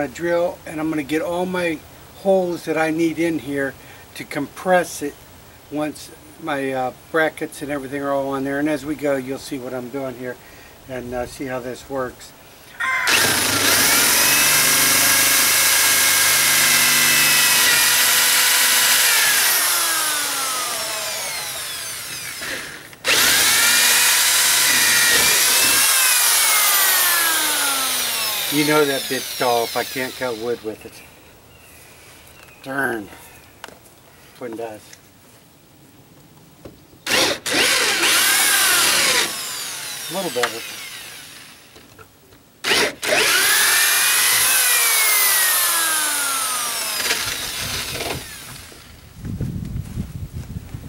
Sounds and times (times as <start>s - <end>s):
Speech: 0.0s - 12.4s, 28.5s - 31.0s, 32.6s - 33.2s, 34.4s - 35.0s, 40.1s - 40.7s.